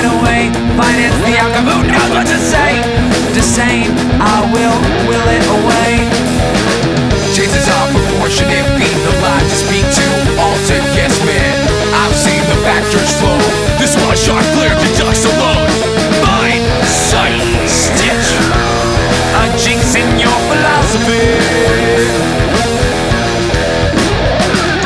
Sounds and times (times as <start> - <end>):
Exciting music: 0.0 - 24.8.